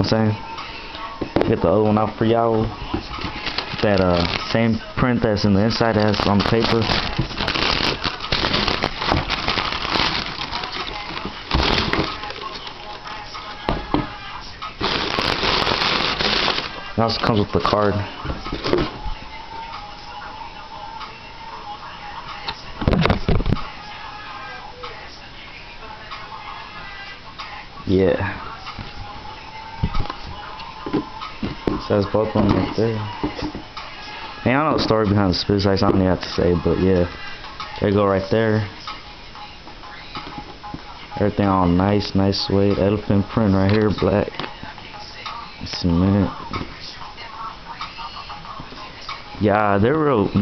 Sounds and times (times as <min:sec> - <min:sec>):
Crackle: 0:06.0 - 0:13.0.